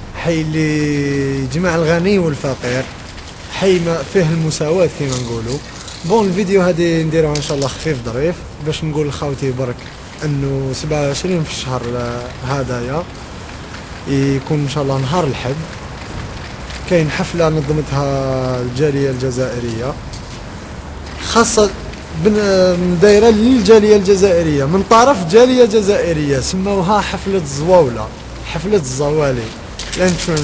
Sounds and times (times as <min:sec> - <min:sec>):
Speech: 0:00.2 - 0:02.9, 0:03.5 - 0:13.1, 0:14.1 - 0:15.8, 0:16.9 - 0:20.0, 0:21.2 - 0:30.4.